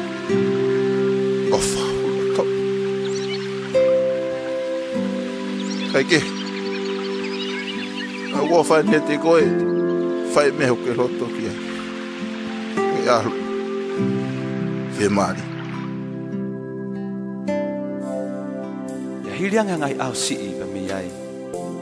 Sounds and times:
Music: 0.0 - 21.8
Speech: 1.5 - 2.5, 6.0 - 6.3, 8.4 - 9.6, 10.3 - 11.6, 12.9 - 13.4, 15.0 - 15.4, 19.3 - 21.2.

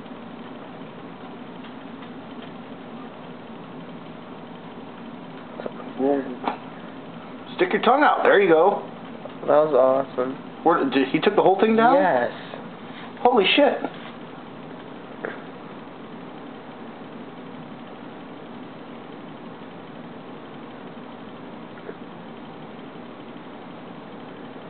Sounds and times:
Speech: 5.6 - 6.5, 7.5 - 12.6, 13.2 - 13.9.

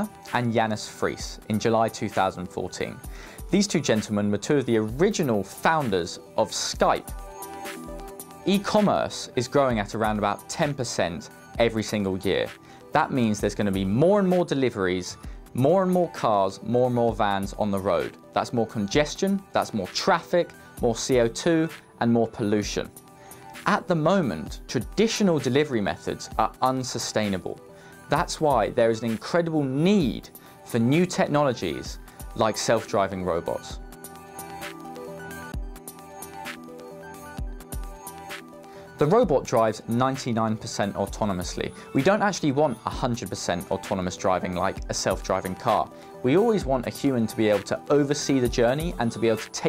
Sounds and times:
Speech: 0.0 - 7.0, 8.5 - 22.9, 23.6 - 33.8, 39.0 - 49.6
Music: 0.0 - 49.6.

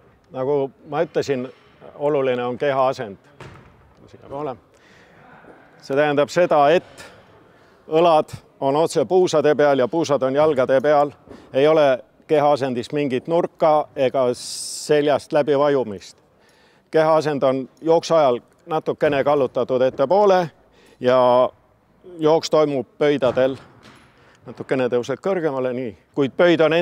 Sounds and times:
Inside, large room or hall: 0.0 - 26.8
Speech: 5.2 - 7.2, 16.9 - 23.6, 24.5 - 26.8.

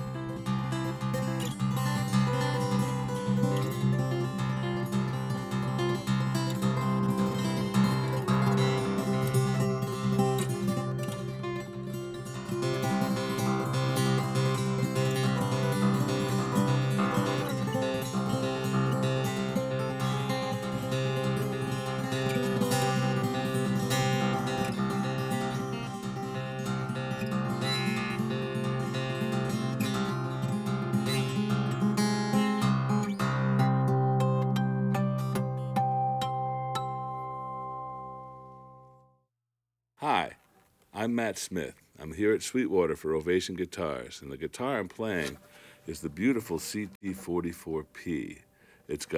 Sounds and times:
Guitar: 0.0 - 39.1, 44.2 - 49.1.

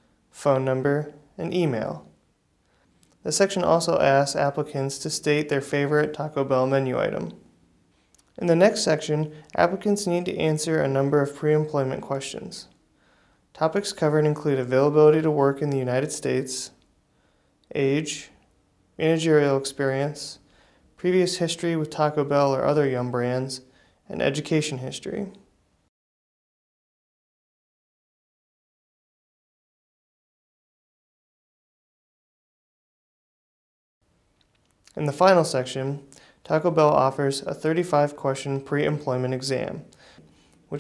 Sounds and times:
Speech: 0.4 - 2.2, 3.2 - 7.5, 8.3 - 12.8, 13.6 - 16.8, 17.7 - 18.4, 19.0 - 25.5, 34.9 - 40.0.

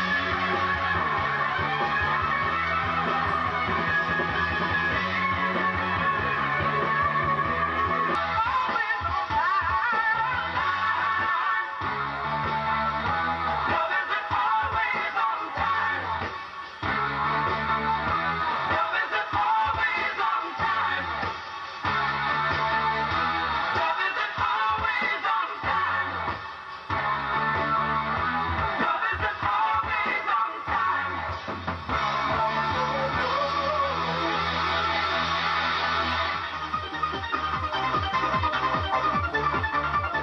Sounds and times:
Music: 0.0 - 40.2.

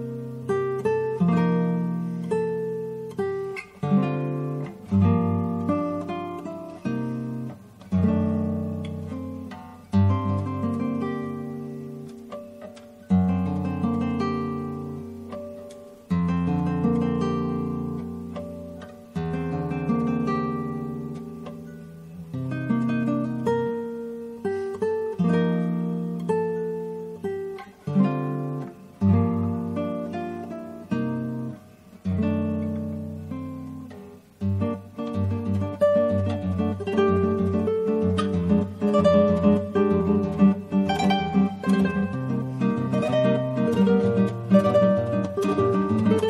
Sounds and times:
Guitar: 0.0 - 46.2.

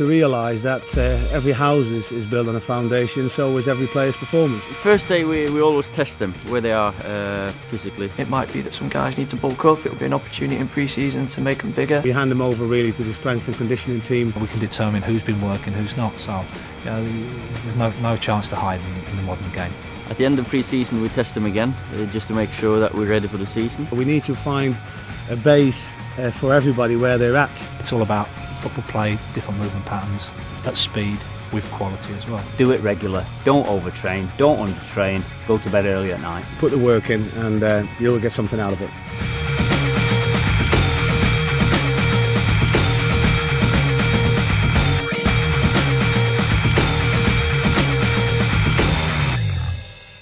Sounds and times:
Speech: 0.0 - 39.0
Music: 0.0 - 50.2.

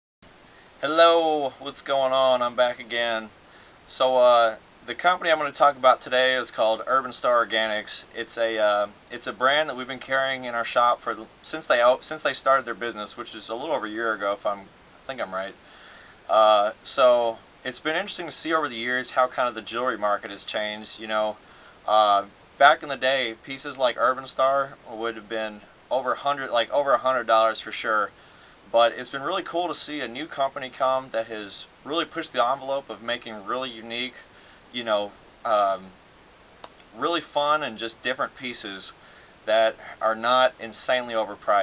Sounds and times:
Speech: 0.8 - 15.6, 16.3 - 36.0, 36.9 - 41.6.

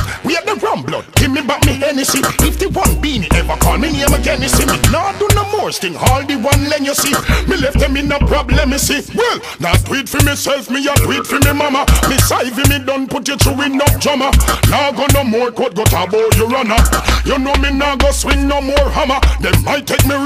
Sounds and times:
Music: 0.0 - 20.2.

